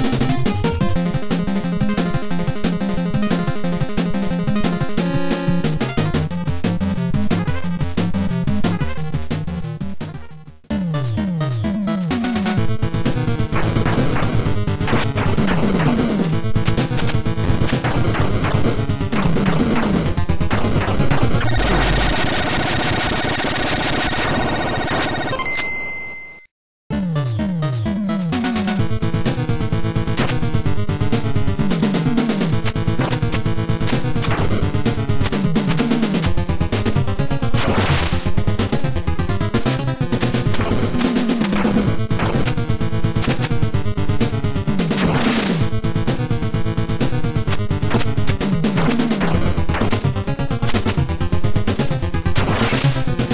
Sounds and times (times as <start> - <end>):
Music: 0.0 - 23.8, 26.9 - 53.3.